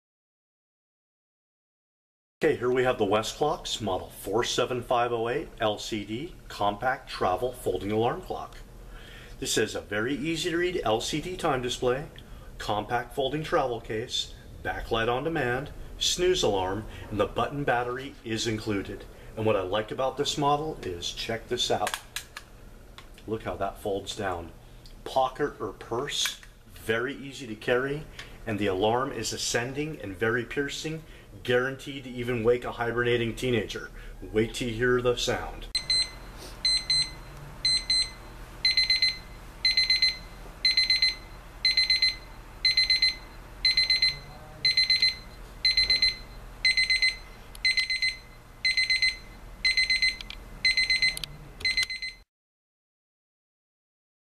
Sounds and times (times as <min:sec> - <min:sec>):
Speech: 0:02.4 - 0:08.7, 0:09.4 - 0:22.0, 0:23.2 - 0:35.7.